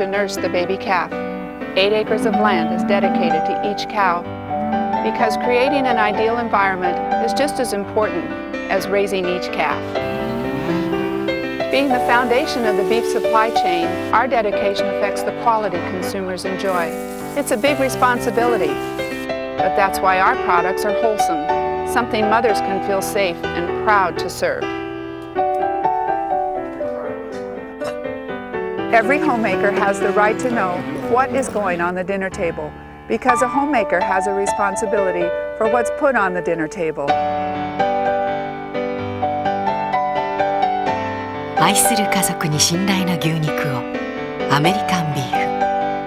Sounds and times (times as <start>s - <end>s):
Music: 0.0s - 46.0s.